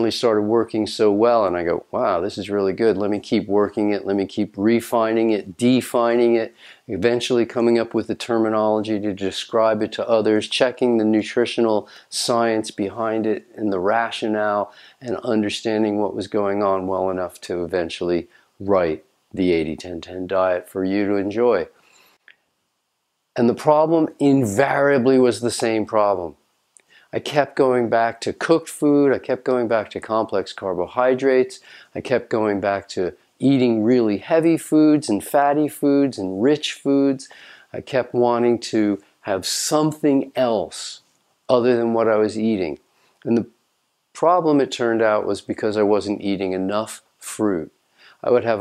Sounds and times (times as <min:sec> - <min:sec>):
Speech: 0:00.0 - 0:21.8, 0:23.4 - 0:26.4, 0:27.1 - 0:43.6, 0:44.2 - 0:48.6
Inside, small room: 0:00.0 - 0:48.6.